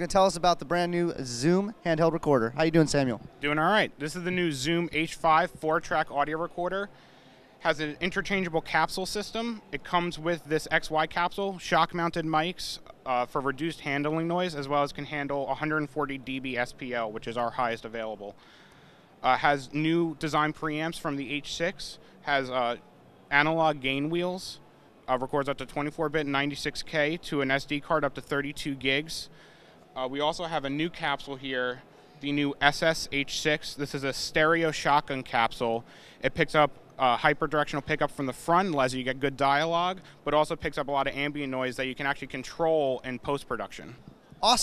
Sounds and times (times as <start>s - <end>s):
Speech: 0.0s - 7.0s, 7.6s - 18.4s, 19.2s - 29.3s, 30.0s - 44.6s.